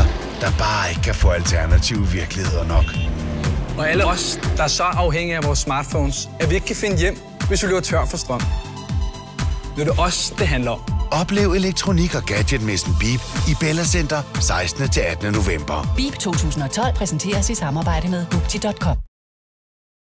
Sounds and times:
Music: 0.0s - 19.1s.

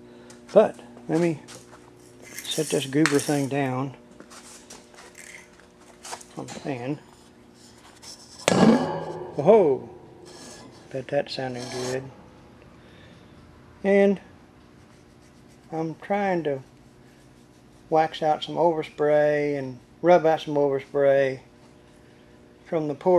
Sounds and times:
Speech: 0.5s - 1.5s, 2.5s - 4.0s, 6.3s - 7.0s, 9.4s - 9.9s, 10.9s - 12.1s, 13.8s - 14.3s, 15.7s - 16.7s, 17.9s - 21.5s, 22.7s - 23.1s.

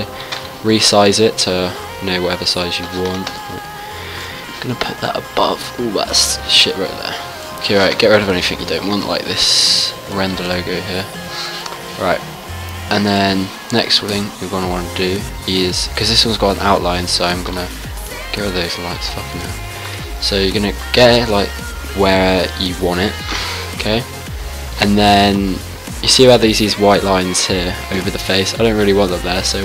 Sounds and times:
Speech: 0.0s - 3.7s, 4.6s - 11.1s, 12.0s - 12.2s, 12.9s - 19.6s, 20.2s - 23.2s, 23.8s - 24.1s, 24.8s - 29.6s
Music: 0.0s - 29.6s.

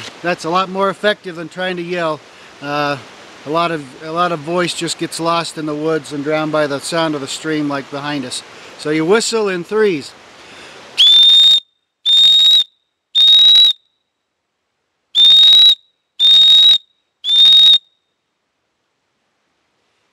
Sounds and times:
Whistle: 11.0s - 14.1s, 15.2s - 18.2s.

